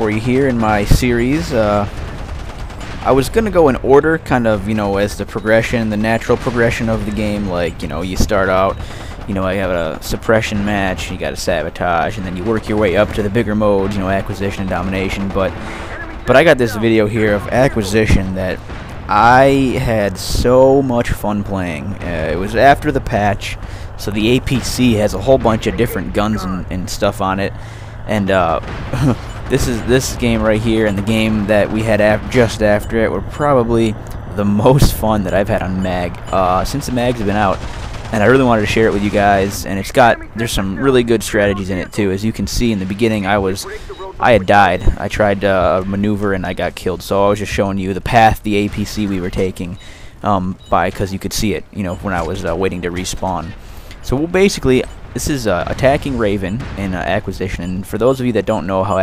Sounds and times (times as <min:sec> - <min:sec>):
Speech: 0:00.0 - 0:02.0, 0:03.0 - 0:59.0.